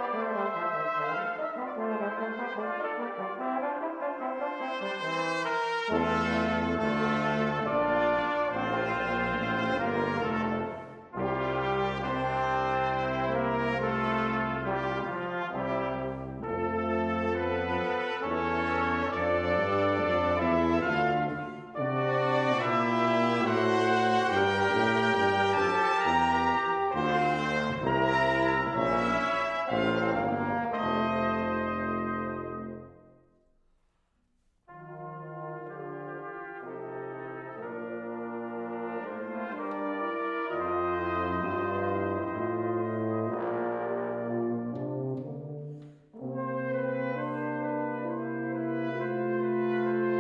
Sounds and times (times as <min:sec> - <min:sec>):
Trombone: 0:00.0 - 0:33.1, 0:34.7 - 0:50.2
Trumpet: 0:00.0 - 0:33.3, 0:34.6 - 0:50.2
French horn: 0:00.0 - 0:50.2.